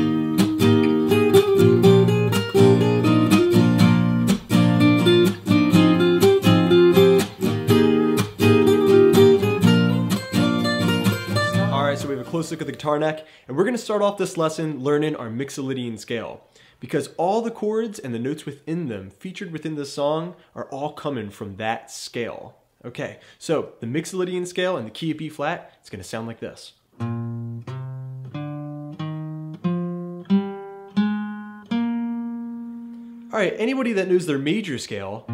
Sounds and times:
Speech: 0:11.6 - 0:26.8, 0:33.3 - 0:35.3.

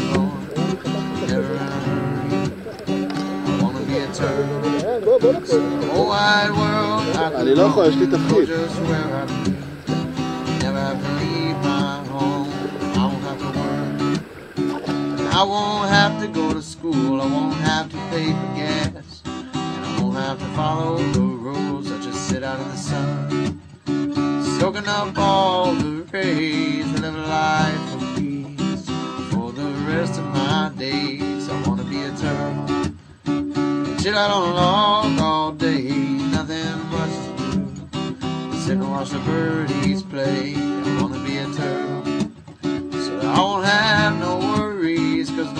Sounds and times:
Music: 0:00.0 - 0:45.5
Speech: 0:03.6 - 0:09.2.

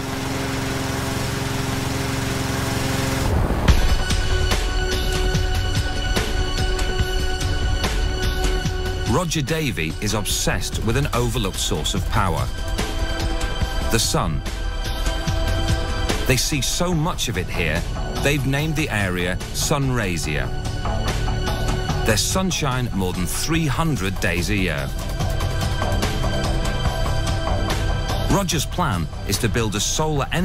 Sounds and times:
Music: 0:00.0 - 0:30.4
Speech: 0:09.1 - 0:12.5, 0:13.9 - 0:14.4, 0:16.2 - 0:20.5, 0:22.1 - 0:25.0, 0:28.3 - 0:30.4.

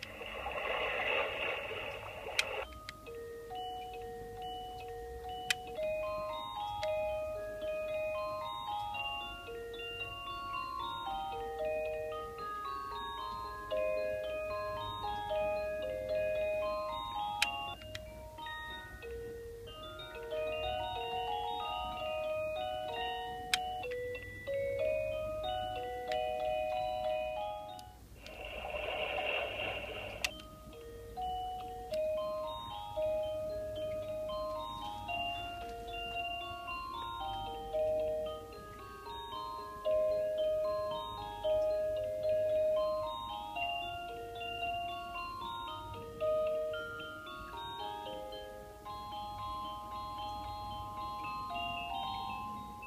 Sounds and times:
Alarm clock: 0:02.0 - 0:52.8
Music: 0:02.3 - 0:52.8.

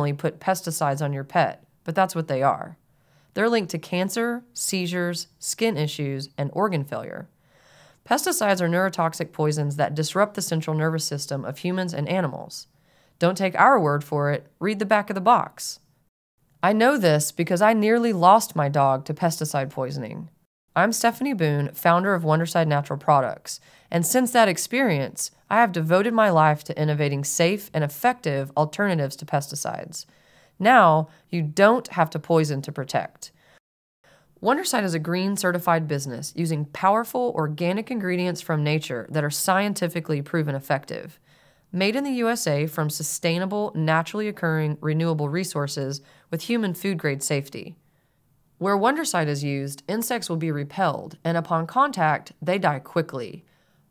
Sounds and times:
Speech: 0:00.0 - 0:02.8, 0:03.4 - 0:07.3, 0:08.0 - 0:15.8, 0:16.6 - 0:33.4, 0:34.4 - 0:47.8, 0:48.6 - 0:53.5.

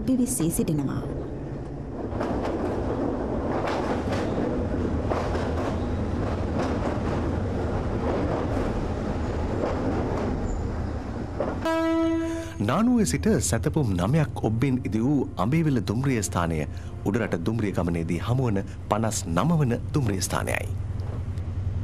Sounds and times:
Speech: 0:00.0 - 0:01.2, 0:12.6 - 0:20.8
Outside, rural or natural: 0:00.0 - 0:15.9, 0:18.0 - 0:21.8
Train: 0:00.0 - 0:21.8.

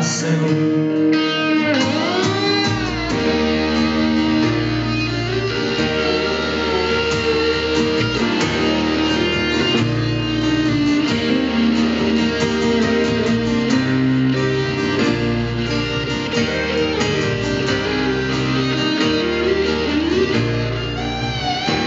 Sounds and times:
Country: 0:00.0 - 0:21.8.

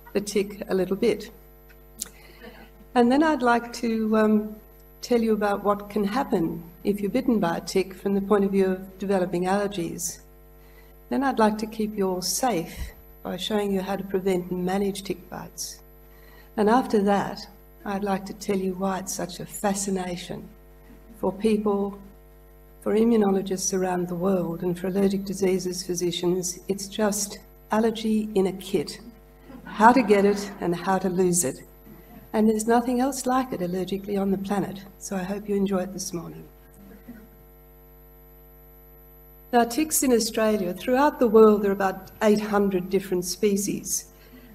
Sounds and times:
Speech: 0:00.1 - 0:01.4, 0:03.0 - 0:10.2, 0:11.1 - 0:15.8, 0:16.6 - 0:20.5, 0:21.2 - 0:22.0, 0:22.8 - 0:31.6, 0:32.3 - 0:36.5, 0:39.6 - 0:44.1.

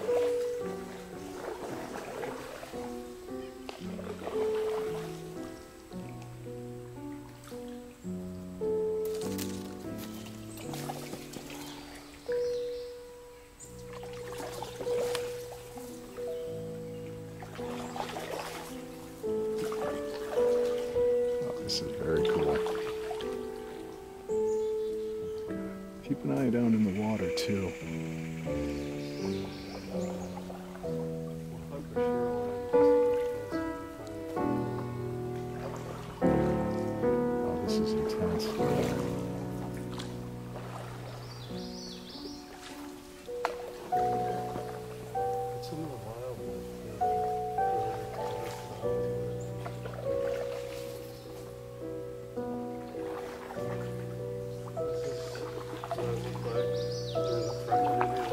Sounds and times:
Music: 0:00.0 - 0:58.3.

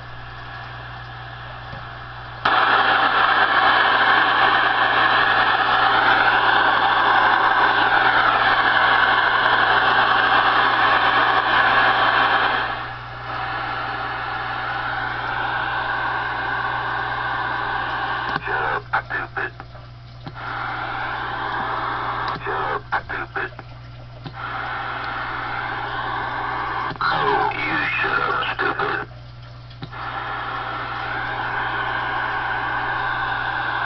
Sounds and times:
Radio: 0:18.2 - 0:19.7, 0:21.3 - 0:23.7, 0:25.7 - 0:29.1
Speech: 0:18.4 - 0:19.6, 0:22.4 - 0:23.6, 0:27.0 - 0:29.2.

